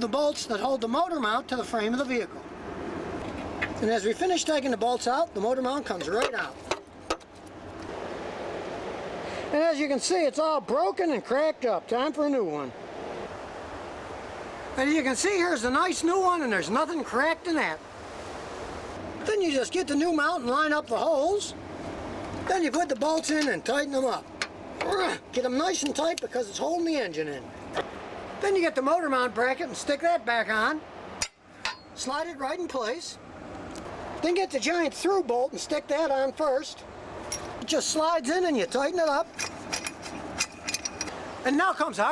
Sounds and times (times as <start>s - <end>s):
Speech: 0.0s - 2.4s, 3.8s - 6.6s, 9.5s - 12.8s, 14.8s - 17.8s, 19.2s - 21.6s, 22.4s - 27.5s, 28.4s - 30.8s, 32.0s - 33.2s, 34.2s - 36.8s, 37.6s - 39.3s, 41.4s - 42.1s.